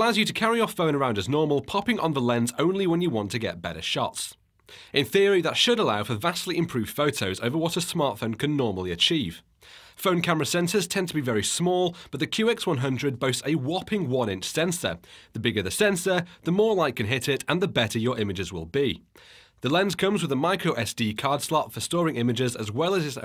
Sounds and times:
Speech: 0:00.0 - 0:23.2.

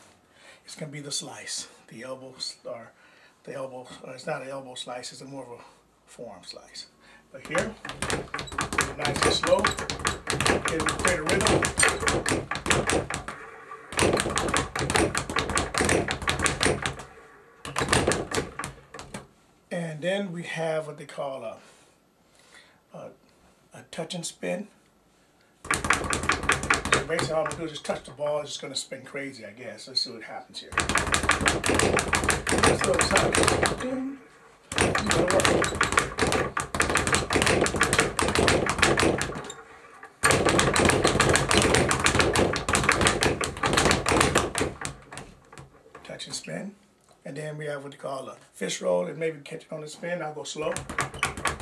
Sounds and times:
Speech: 0:00.7 - 0:07.8, 0:09.0 - 0:09.8, 0:10.6 - 0:11.6, 0:19.7 - 0:21.6, 0:22.9 - 0:24.8, 0:27.0 - 0:30.8, 0:32.7 - 0:34.2, 0:35.0 - 0:35.6, 0:46.0 - 0:50.8
Bouncing: 0:07.5 - 0:19.2.

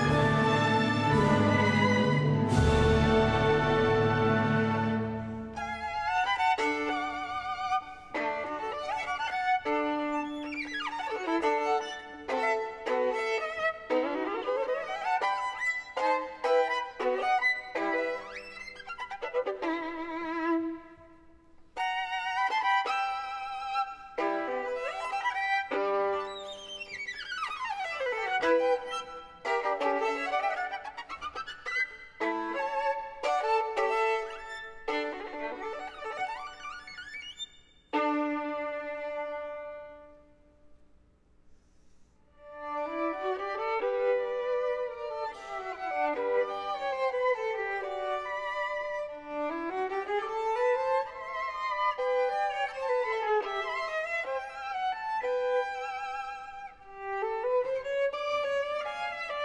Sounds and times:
Violin, fiddle: 0:00.0 - 0:40.4, 0:42.4 - 0:59.4.

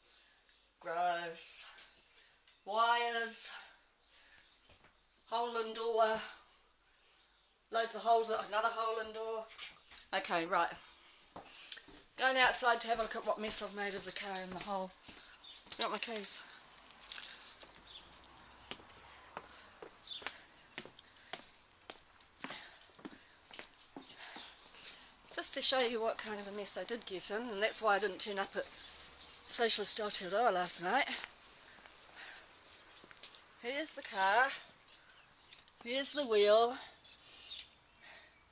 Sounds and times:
Speech: 0:07.7 - 0:09.5, 0:10.1 - 0:10.8, 0:12.2 - 0:15.0, 0:15.8 - 0:16.5, 0:25.4 - 0:28.7, 0:29.5 - 0:31.2, 0:33.6 - 0:34.6, 0:35.8 - 0:36.9.

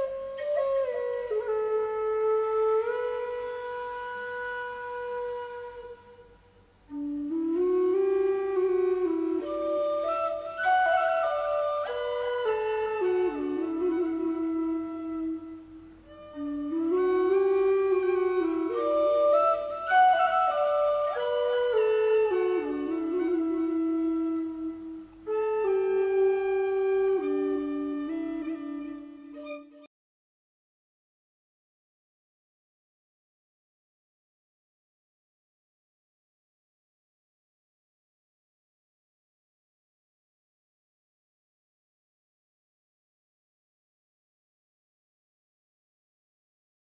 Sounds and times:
Flute: 0:00.0 - 0:29.9.

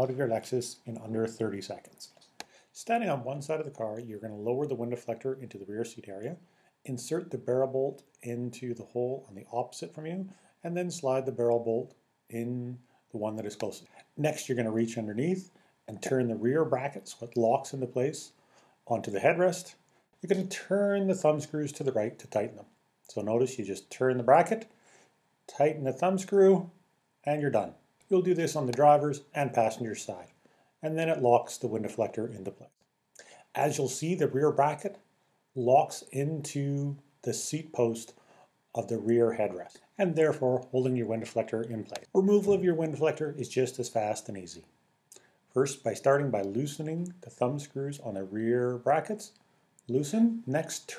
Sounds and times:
Speech: 0:00.0 - 0:24.7, 0:25.5 - 0:35.0, 0:35.6 - 0:38.2, 0:38.8 - 0:44.7, 0:45.6 - 0:50.9.

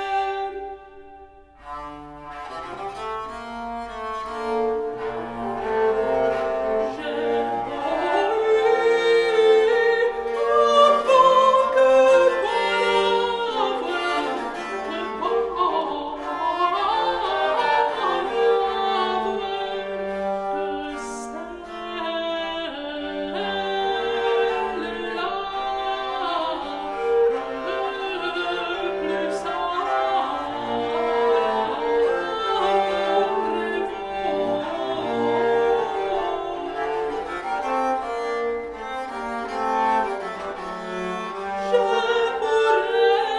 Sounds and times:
Bowed string instrument: 0:00.0 - 0:43.3.

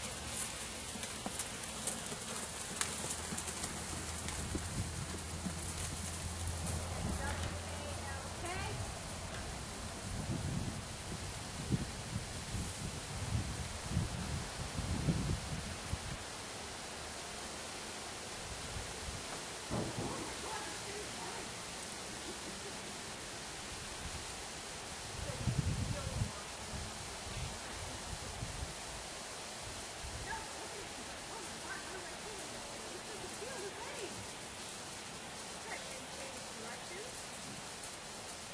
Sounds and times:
Rustle: 0:00.0 - 0:38.5.

